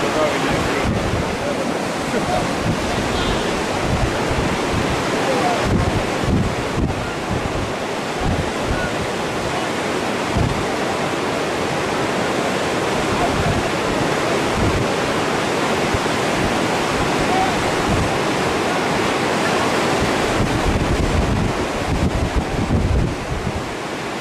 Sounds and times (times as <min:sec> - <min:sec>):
Speech: 0:00.0 - 0:02.5, 0:05.2 - 0:05.7, 0:13.1 - 0:13.7, 0:17.2 - 0:18.3.